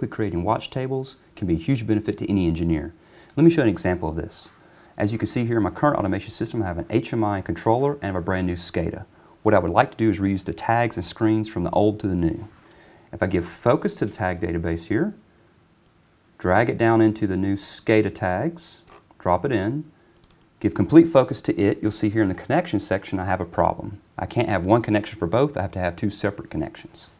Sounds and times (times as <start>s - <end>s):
Speech: 0.0s - 15.3s, 16.4s - 20.0s, 20.6s - 27.1s.